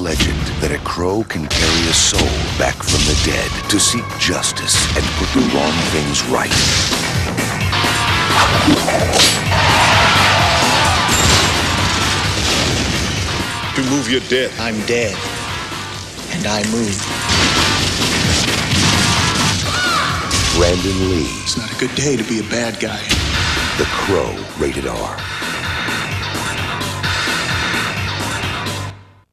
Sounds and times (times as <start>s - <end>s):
Speech: 0.0s - 6.6s, 13.8s - 15.2s, 16.3s - 17.0s, 20.5s - 23.1s, 23.8s - 25.2s
Music: 0.0s - 29.3s.